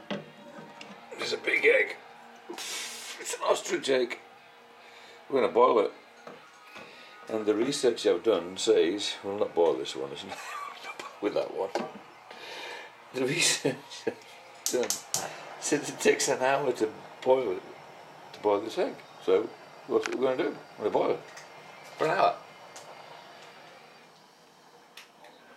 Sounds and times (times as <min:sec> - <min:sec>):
Speech: 0:01.1 - 0:02.0, 0:03.2 - 0:04.2, 0:05.3 - 0:06.0, 0:07.3 - 0:10.4, 0:11.2 - 0:11.8, 0:15.6 - 0:17.7, 0:18.4 - 0:21.2, 0:22.0 - 0:22.4.